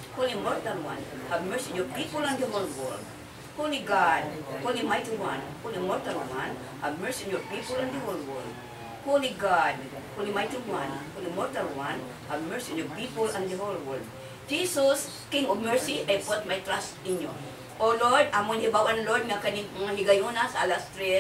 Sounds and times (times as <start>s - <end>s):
Speech: 0.0s - 21.2s.